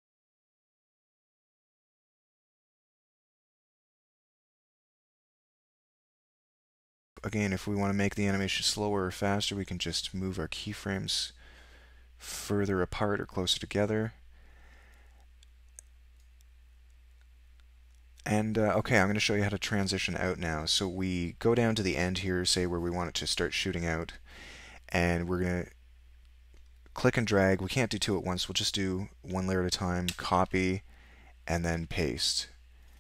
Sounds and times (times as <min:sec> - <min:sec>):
Speech: 0:07.2 - 0:11.4, 0:12.2 - 0:14.2, 0:18.2 - 0:24.3, 0:24.9 - 0:25.8, 0:26.9 - 0:30.9, 0:31.5 - 0:32.6.